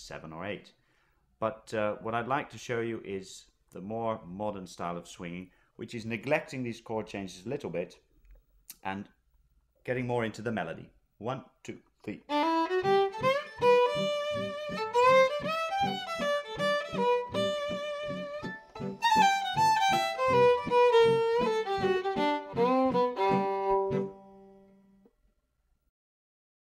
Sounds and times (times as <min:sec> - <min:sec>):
Speech: 0:00.0 - 0:00.8, 0:01.4 - 0:08.1, 0:08.7 - 0:09.2, 0:09.8 - 0:12.3
Violin, fiddle: 0:12.3 - 0:24.8.